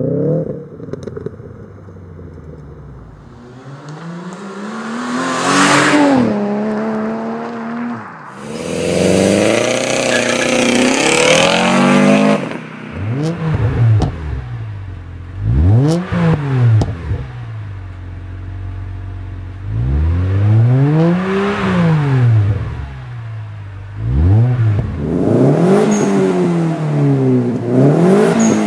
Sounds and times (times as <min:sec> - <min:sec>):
Clatter: 0:00.4 - 0:04.4, 0:12.4 - 0:19.6.